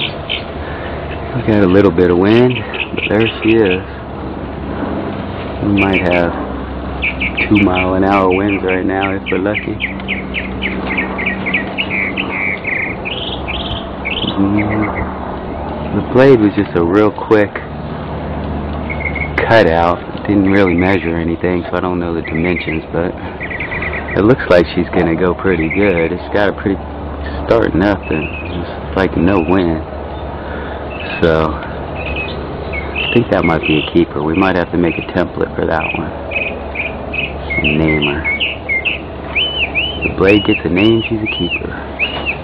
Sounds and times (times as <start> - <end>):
Speech: 1.3 - 3.9, 5.6 - 6.4, 7.4 - 9.8, 14.2 - 15.0, 15.9 - 17.7, 19.4 - 23.2, 24.2 - 29.9, 31.0 - 31.7, 33.1 - 36.2, 37.6 - 38.3, 40.0 - 41.8.